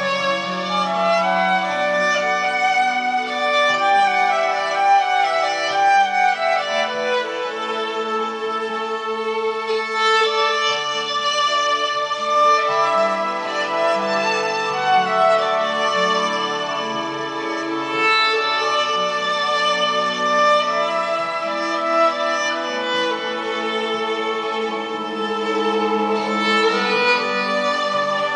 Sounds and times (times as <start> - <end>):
Violin, fiddle: 0.0 - 28.3.